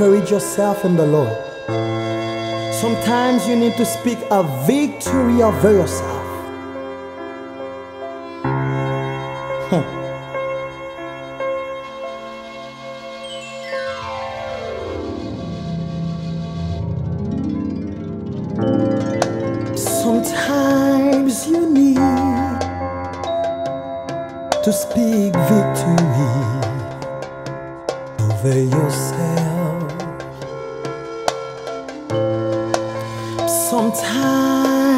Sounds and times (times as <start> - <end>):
New-age music: 0.0 - 34.9.